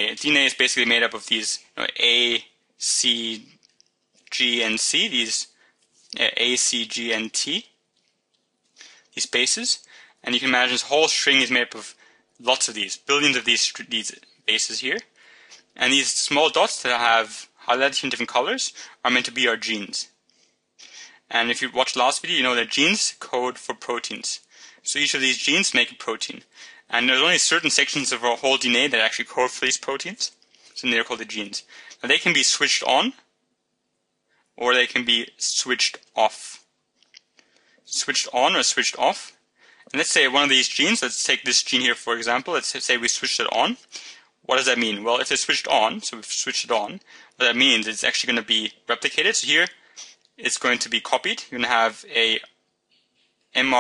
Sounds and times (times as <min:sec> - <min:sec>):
Speech: 0:00.0 - 0:03.6, 0:04.3 - 0:07.8, 0:09.2 - 0:15.2, 0:15.8 - 0:20.2, 0:20.9 - 0:33.3, 0:34.6 - 0:36.7, 0:37.9 - 0:52.6, 0:53.6 - 0:53.8.